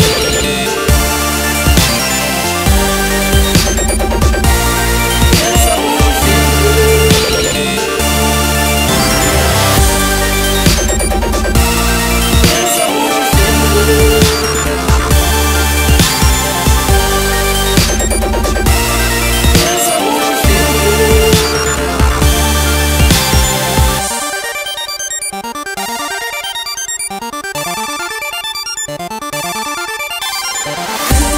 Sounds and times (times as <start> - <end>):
Music: 0.0 - 31.3.